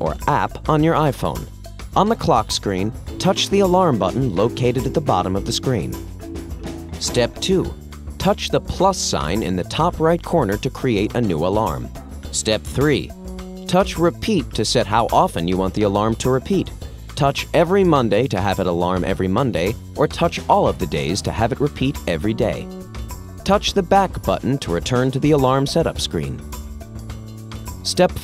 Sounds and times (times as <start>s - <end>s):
Speech: 0.0s - 6.0s, 7.0s - 13.1s, 13.7s - 22.7s, 23.5s - 26.4s, 27.8s - 28.2s
Music: 0.0s - 28.2s.